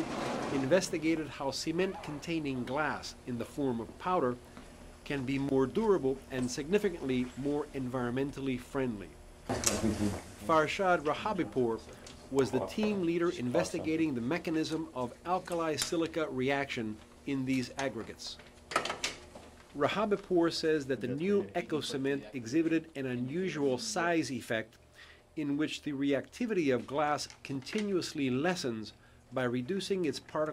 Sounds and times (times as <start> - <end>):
Speech: 0.6 - 4.4, 5.1 - 9.1, 9.7 - 18.4, 19.8 - 24.7, 25.4 - 30.5.